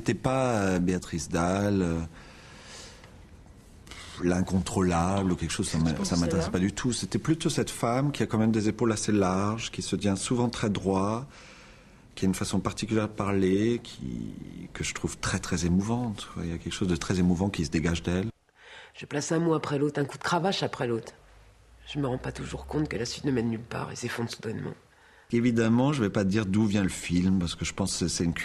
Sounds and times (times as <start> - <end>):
Speech: 0.0 - 2.1, 4.2 - 11.3, 12.2 - 18.4, 19.0 - 21.2, 21.8 - 28.4.